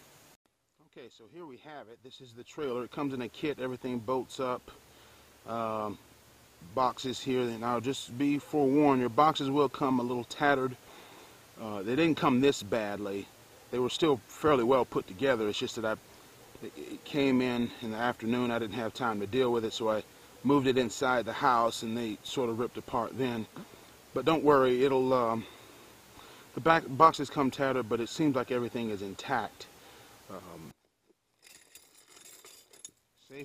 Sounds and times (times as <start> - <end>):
Speech: 0.8 - 4.8, 5.5 - 6.0, 6.6 - 10.8, 11.6 - 16.0, 16.6 - 23.5, 24.2 - 25.5, 26.6 - 29.7, 30.3 - 30.7, 33.2 - 33.4.